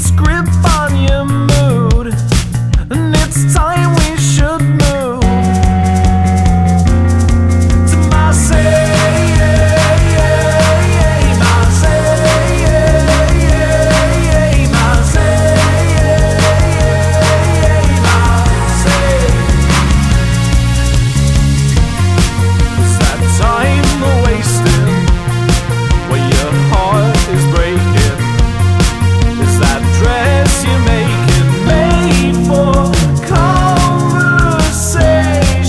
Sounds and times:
Hip hop music: 0:00.0 - 0:35.6
Independent music: 0:00.0 - 0:35.6.

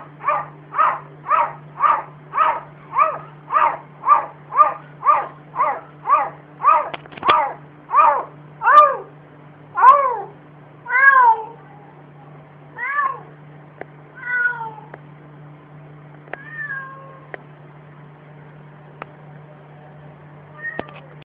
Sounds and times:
Meow: 0:10.9 - 0:11.6, 0:12.8 - 0:13.3, 0:14.2 - 0:14.9, 0:16.3 - 0:17.3, 0:20.6 - 0:21.2.

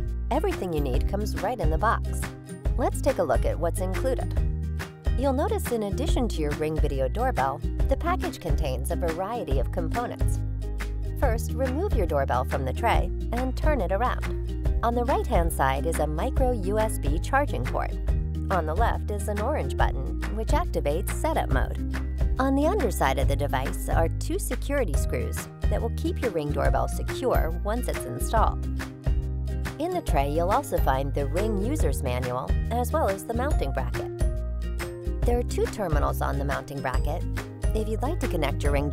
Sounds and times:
Music: 0:00.0 - 0:38.9
Speech: 0:00.3 - 0:04.3, 0:05.2 - 0:10.4, 0:11.2 - 0:14.2, 0:14.8 - 0:21.8, 0:22.4 - 0:28.6, 0:29.8 - 0:34.1, 0:35.2 - 0:38.9.

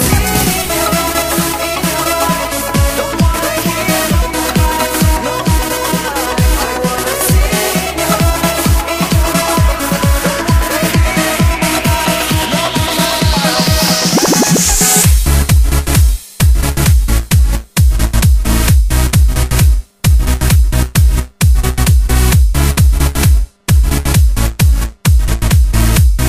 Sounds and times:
Music: 0:00.0 - 0:26.2.

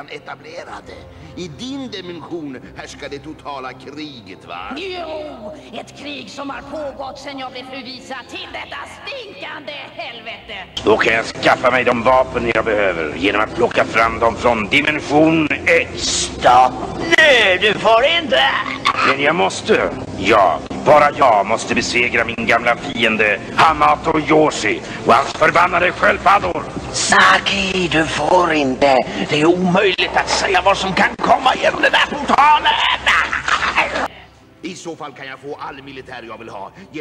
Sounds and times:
Speech: 0:00.0 - 0:32.9.

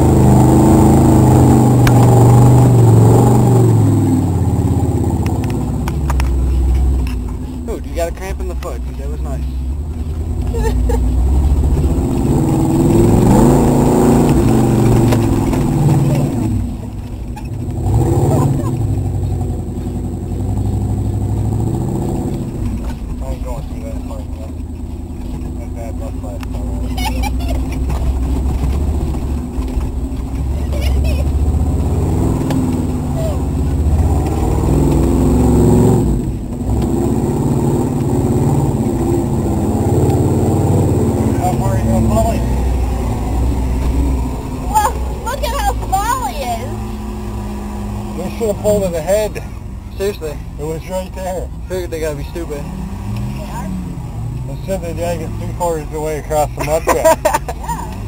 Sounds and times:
Truck: 0:00.0 - 0:58.0.

